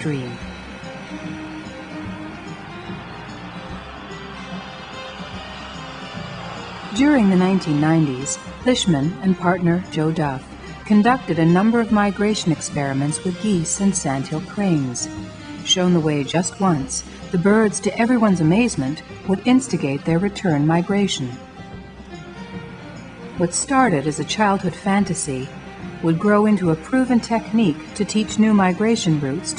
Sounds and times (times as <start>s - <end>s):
Speech: 0.0s - 0.4s, 7.0s - 15.1s, 15.7s - 21.4s, 23.4s - 29.5s
Music: 0.0s - 29.5s.